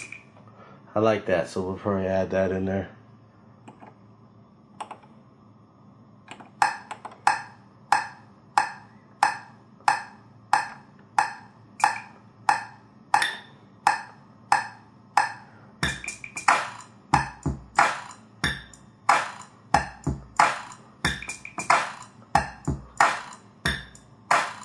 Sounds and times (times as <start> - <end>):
Speech: 0.9 - 3.0.